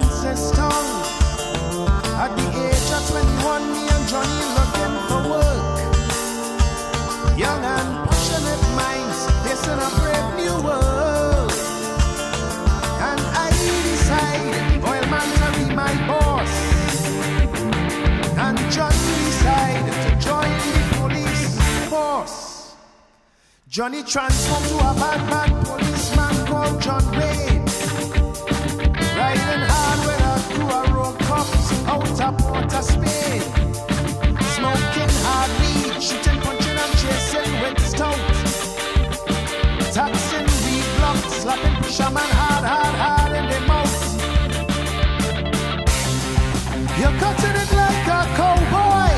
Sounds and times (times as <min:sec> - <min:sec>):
Music: 0:00.0 - 0:49.1.